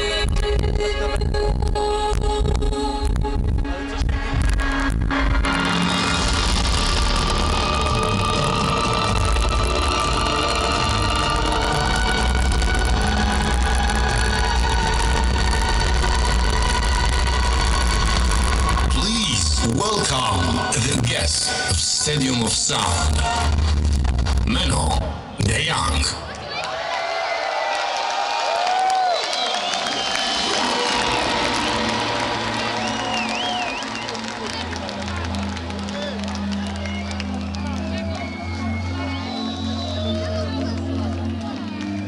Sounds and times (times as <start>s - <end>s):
Music: 0.0s - 26.2s, 29.1s - 42.0s
Speech: 18.9s - 23.3s, 24.5s - 26.5s.